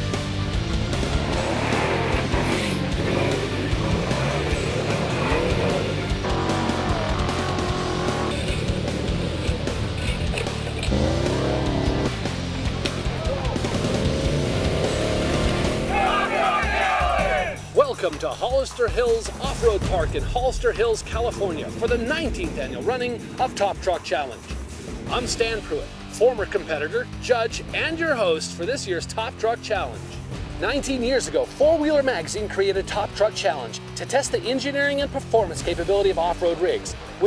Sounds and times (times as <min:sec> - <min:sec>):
Car: 0:00.0 - 0:17.5
Music: 0:00.0 - 0:37.2
Speech: 0:17.8 - 0:24.4, 0:25.1 - 0:30.0, 0:30.6 - 0:37.2.